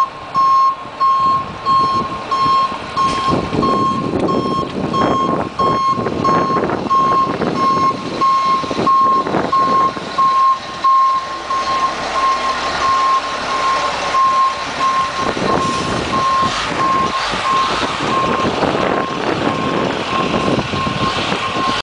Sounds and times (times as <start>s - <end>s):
Reversing beeps: 0.0s - 21.8s.